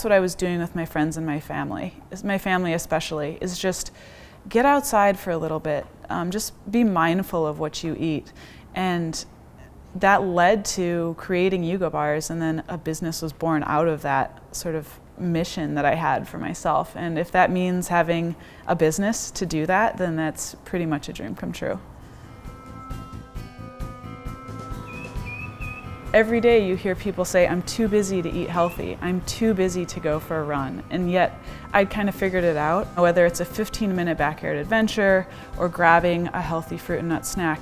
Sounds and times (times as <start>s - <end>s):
Speech: 0.0s - 3.9s, 4.5s - 9.3s, 10.0s - 21.8s, 26.2s - 37.6s
Music: 21.6s - 37.6s.